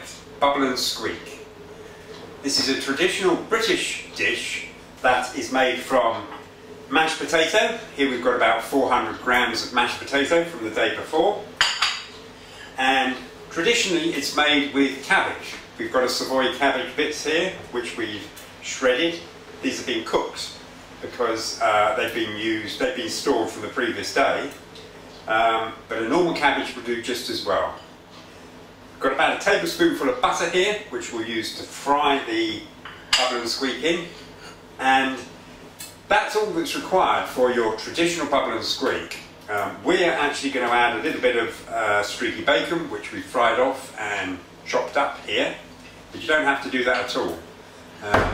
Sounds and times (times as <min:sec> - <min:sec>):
Speech: 0:00.0 - 0:01.6, 0:02.4 - 0:11.6, 0:12.7 - 0:24.6, 0:25.2 - 0:27.9, 0:29.0 - 0:48.3.